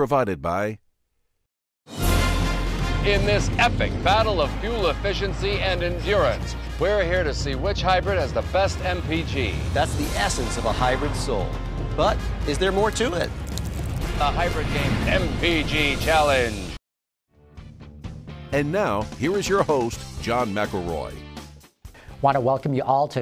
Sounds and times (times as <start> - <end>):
Speech: 0.0 - 0.8, 3.1 - 13.3, 14.2 - 16.7, 18.6 - 21.2, 22.2 - 23.2
Music: 1.9 - 23.2.